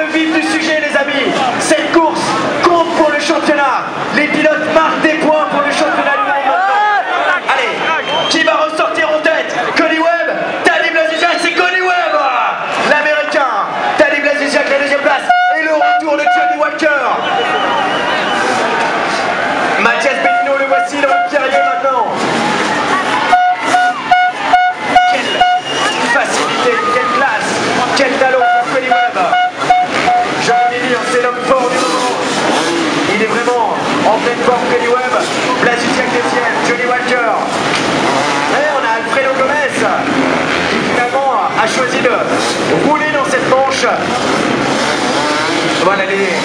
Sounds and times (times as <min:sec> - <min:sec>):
Speech: 0:00.0 - 0:17.3, 0:18.4 - 0:22.2, 0:25.0 - 0:29.4, 0:30.4 - 0:32.3, 0:33.1 - 0:37.6, 0:38.5 - 0:40.1, 0:40.8 - 0:44.2, 0:45.8 - 0:46.4
Motorcycle: 0:27.5 - 0:36.6, 0:37.4 - 0:46.4.